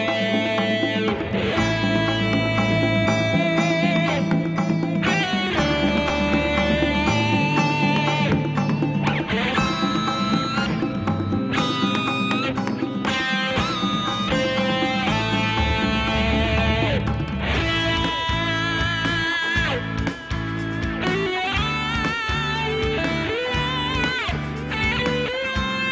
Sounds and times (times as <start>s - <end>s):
Music: 0.0s - 25.9s.